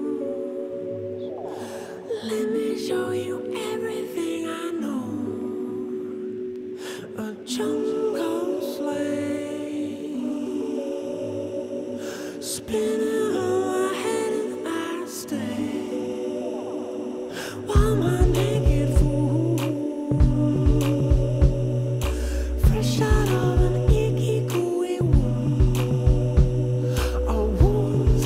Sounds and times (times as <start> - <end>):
Music: 0.0 - 28.2.